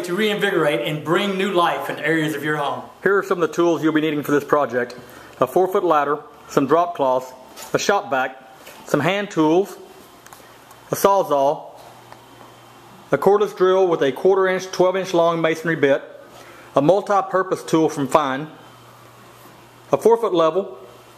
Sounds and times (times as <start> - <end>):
Speech: 0.0 - 9.9, 10.9 - 11.8, 13.1 - 16.2, 16.8 - 18.6, 19.9 - 20.9.